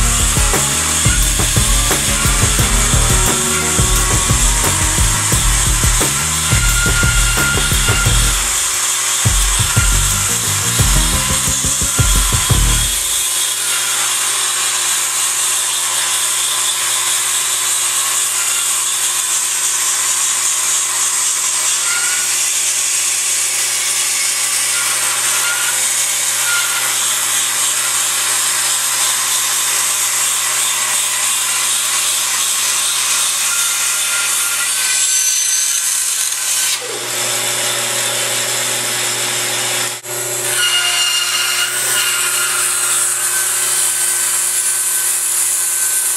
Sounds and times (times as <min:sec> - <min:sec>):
Music: 0:00.0 - 0:08.6, 0:09.3 - 0:13.0.